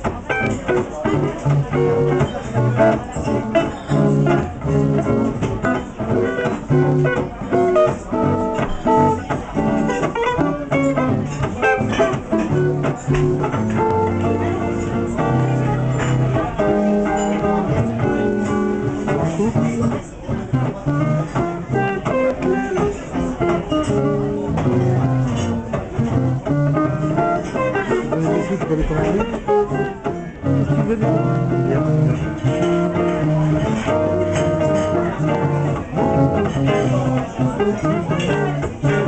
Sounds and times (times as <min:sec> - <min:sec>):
Music: 0:00.0 - 0:39.0
Speech: 0:00.0 - 0:39.0.